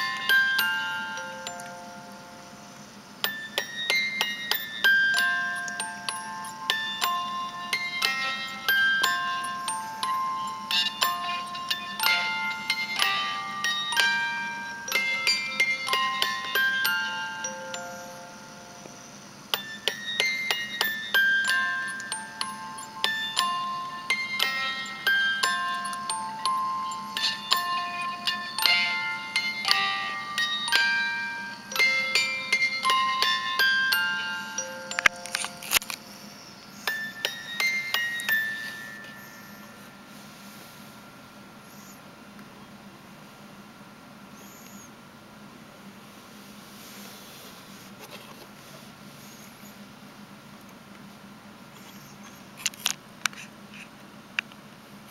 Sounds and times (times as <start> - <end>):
Music: 0.0 - 39.9.